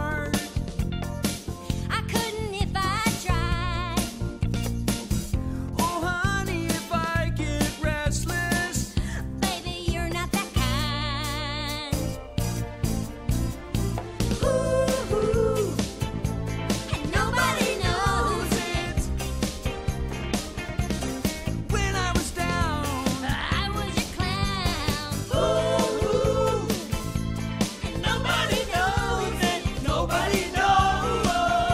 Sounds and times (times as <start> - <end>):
Music: 0.0 - 31.7.